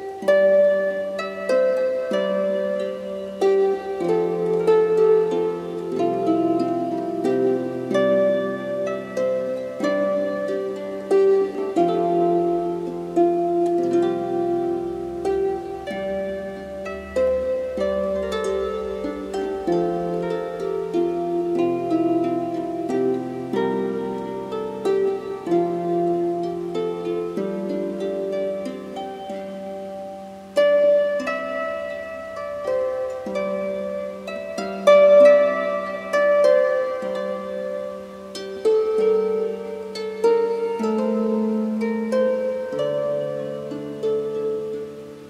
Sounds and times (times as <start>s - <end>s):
Harp: 0.0s - 45.2s
Plucked string instrument: 0.0s - 45.2s.